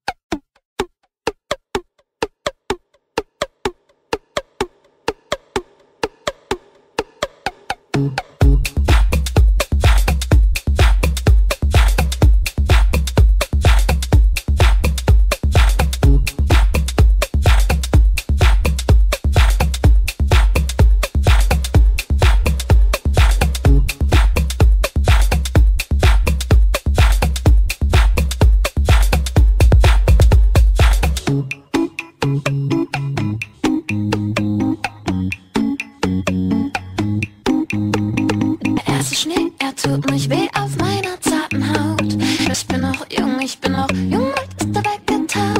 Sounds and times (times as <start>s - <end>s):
Pop music: 7.4s - 14.0s, 14.6s - 45.5s.